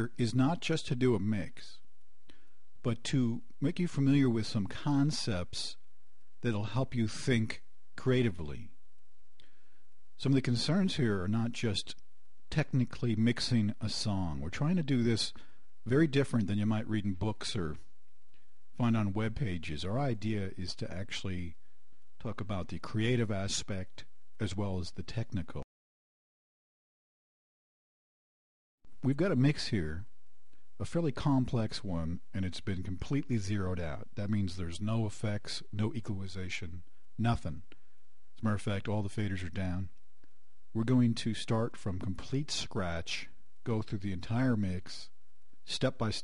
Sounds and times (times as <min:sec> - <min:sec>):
Speech: 0:00.0 - 0:01.9, 0:02.8 - 0:08.8, 0:10.2 - 0:17.9, 0:18.8 - 0:21.6, 0:22.2 - 0:25.7, 0:29.0 - 0:30.1, 0:30.8 - 0:37.8, 0:38.4 - 0:40.0, 0:40.7 - 0:46.2.